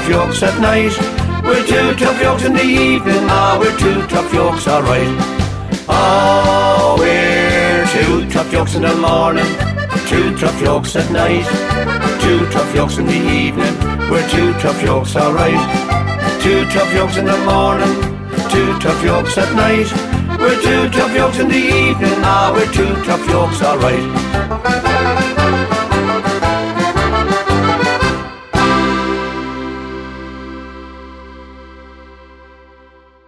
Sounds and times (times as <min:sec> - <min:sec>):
Accordion: 0:00.0 - 0:33.2.